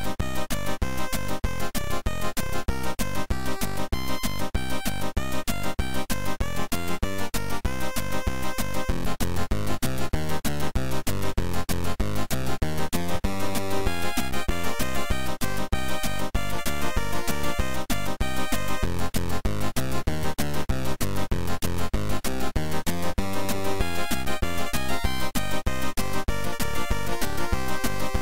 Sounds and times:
Music: 0.0s - 28.2s.

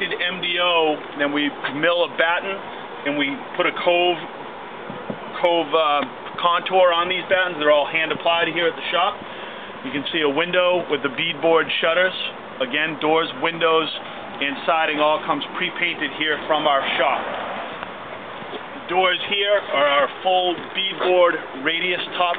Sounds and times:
Speech: 0.0s - 4.3s, 5.3s - 9.2s, 9.8s - 17.3s, 18.8s - 22.3s.

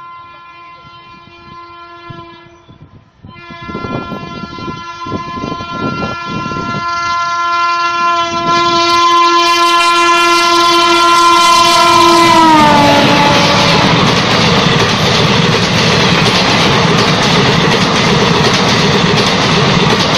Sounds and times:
Train whistle: 0.0s - 14.1s
Train horn: 0.0s - 14.2s
Outside, urban or manmade: 0.0s - 20.1s
Railroad car, train wagon: 0.0s - 20.1s.

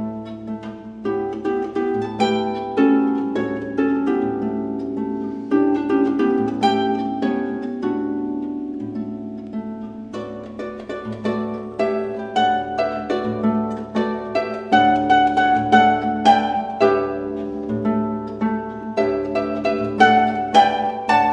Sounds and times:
Harp: 0.0s - 21.3s
Pizzicato: 0.0s - 21.3s.

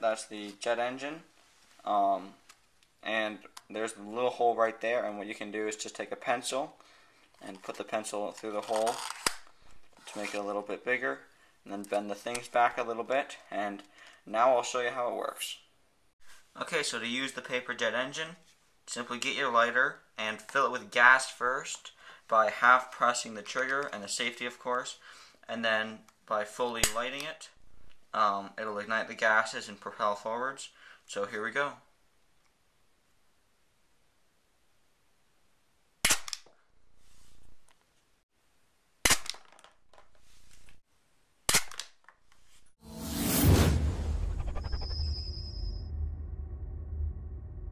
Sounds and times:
Inside, small room: 0.0s - 47.7s
Cap gun: 36.0s - 36.5s, 39.0s - 39.6s, 41.5s - 41.9s.

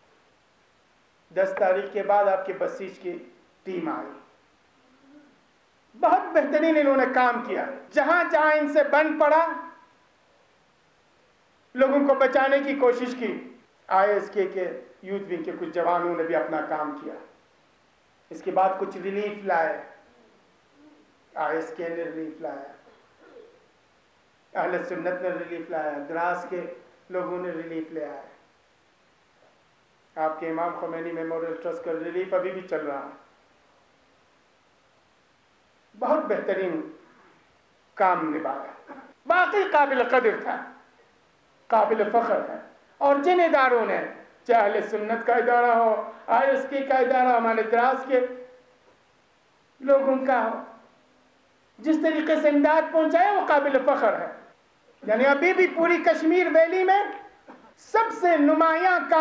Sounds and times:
Narration, monologue: 0.0s - 59.2s
Male speech, man speaking: 1.4s - 4.3s, 6.0s - 9.8s, 11.8s - 17.4s, 18.3s - 20.0s, 21.4s - 22.8s, 24.6s - 28.4s, 30.2s - 33.3s, 36.0s - 37.0s, 38.0s - 40.8s, 41.7s - 48.5s, 49.8s - 50.8s, 51.8s - 59.2s.

